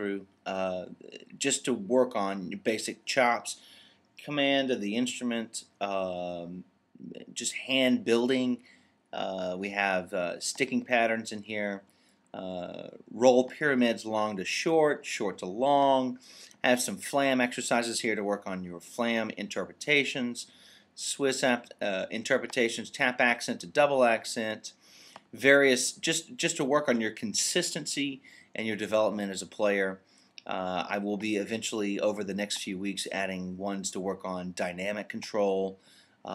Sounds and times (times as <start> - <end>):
Speech: 0.0 - 3.6, 4.2 - 8.6, 9.2 - 36.3.